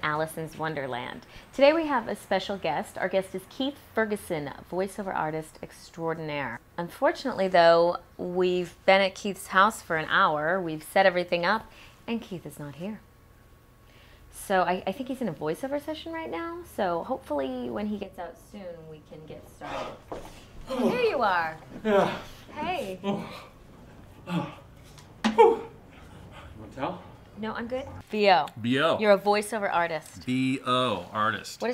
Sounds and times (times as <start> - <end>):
Speech: 30.2 - 31.6.